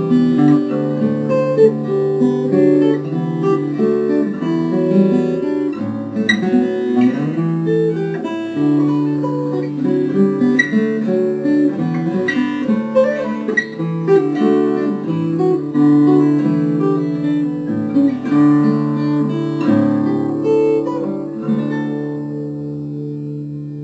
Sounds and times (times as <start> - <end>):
Acoustic guitar: 0.0 - 23.8.